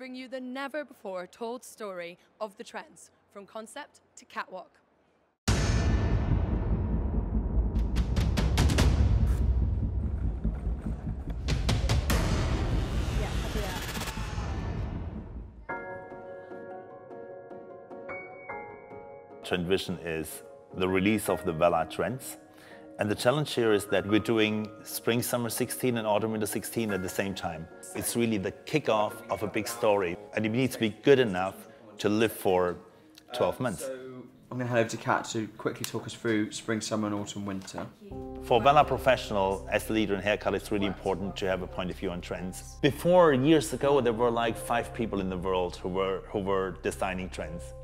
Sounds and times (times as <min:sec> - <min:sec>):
Music: 0:05.5 - 0:34.0, 0:38.1 - 0:47.8.